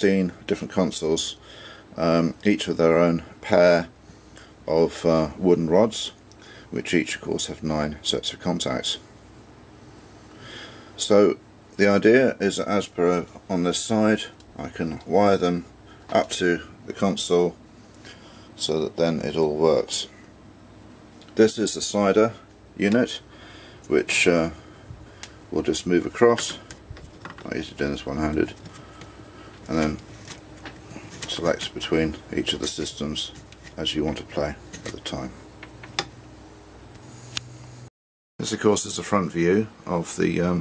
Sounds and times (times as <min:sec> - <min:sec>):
Speech: 0:00.0 - 0:01.4, 0:02.0 - 0:03.9, 0:04.7 - 0:09.1, 0:11.0 - 0:17.6, 0:18.6 - 0:20.2, 0:21.3 - 0:23.3, 0:23.9 - 0:24.6, 0:25.5 - 0:26.6, 0:27.4 - 0:28.6, 0:29.7 - 0:30.0, 0:31.2 - 0:35.4, 0:38.4 - 0:40.6.